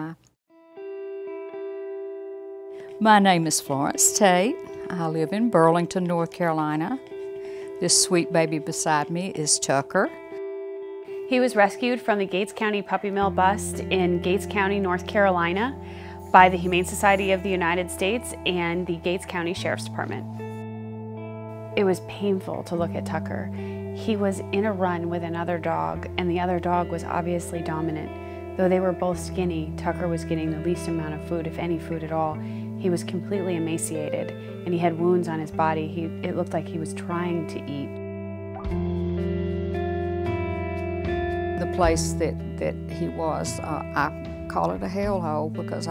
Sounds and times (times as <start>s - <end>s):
Speech: 0.0s - 0.2s, 3.0s - 7.0s, 7.8s - 10.1s, 11.3s - 20.2s, 21.8s - 37.9s, 41.6s - 45.9s
Music: 0.0s - 45.9s.